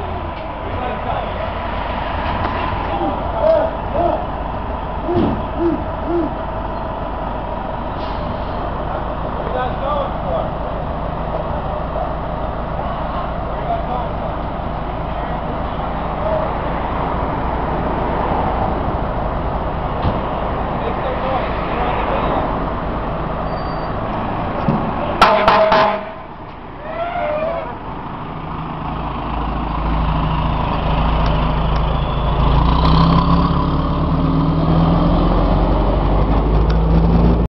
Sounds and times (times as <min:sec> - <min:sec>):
Vehicle: 0:00.0 - 0:37.4
Accelerating, revving, vroom: 0:32.4 - 0:37.4.